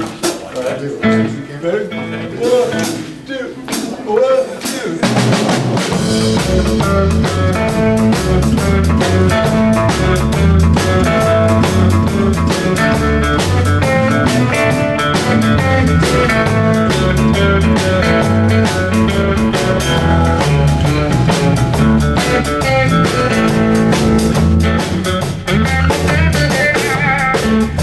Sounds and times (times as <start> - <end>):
Bass guitar: 0.0 - 4.0, 5.0 - 27.8.